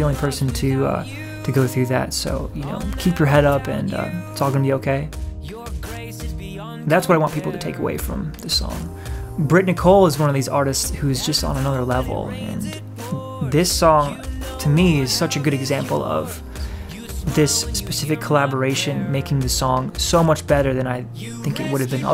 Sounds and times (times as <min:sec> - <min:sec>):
Speech: 0:00.0 - 0:05.1, 0:06.6 - 0:16.4, 0:17.0 - 0:22.1
Music: 0:00.0 - 0:22.1.